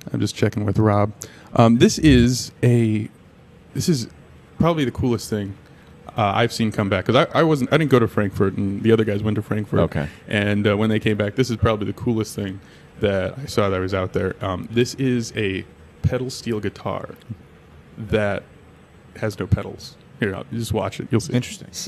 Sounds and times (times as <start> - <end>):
Speech: 0.0 - 3.2, 3.8 - 17.4, 18.0 - 18.5, 19.2 - 21.8.